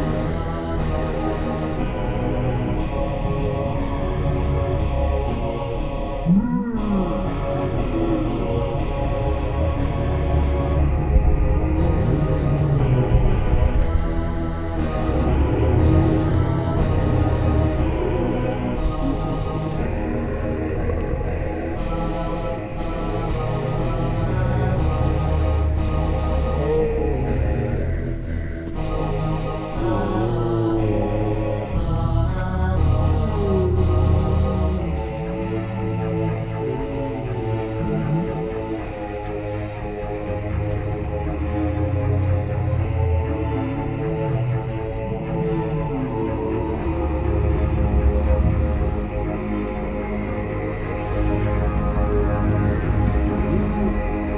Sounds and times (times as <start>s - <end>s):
Scary music: 0.0s - 54.3s.